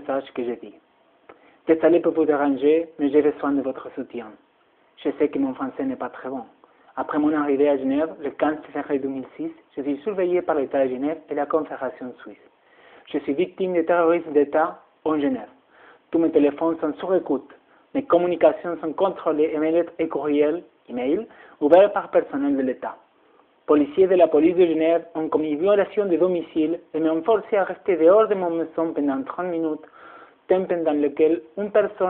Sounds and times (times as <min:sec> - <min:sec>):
Speech: 0:00.0 - 0:00.8, 0:01.7 - 0:04.4, 0:05.0 - 0:12.5, 0:13.1 - 0:23.0, 0:23.7 - 0:29.9, 0:30.5 - 0:32.0.